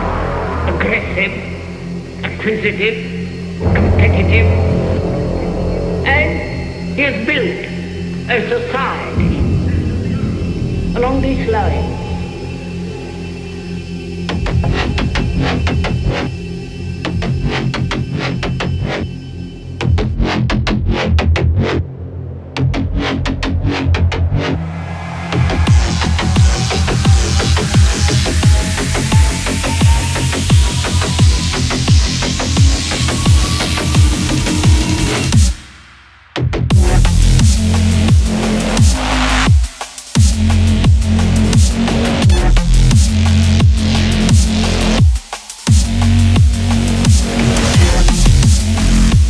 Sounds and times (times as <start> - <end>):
Drum and bass: 0.0 - 49.3.